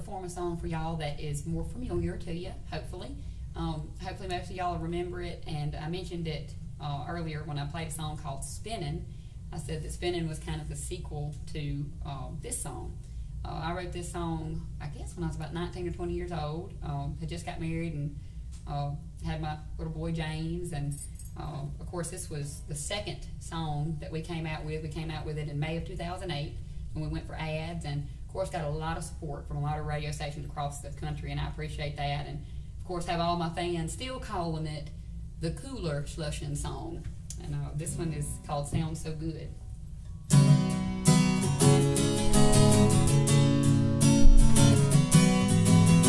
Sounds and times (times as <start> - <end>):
Speech: 0.0 - 39.6.